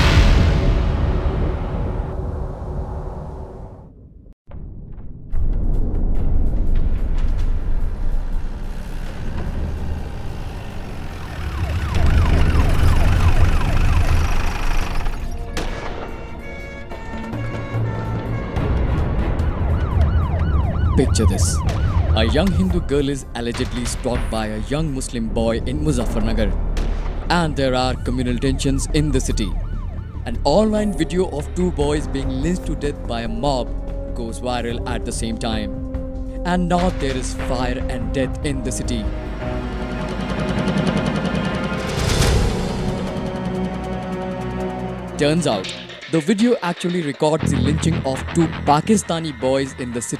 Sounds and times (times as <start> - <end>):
Outside, urban or manmade: 0.0 - 25.0, 25.6 - 32.8, 39.0 - 46.2.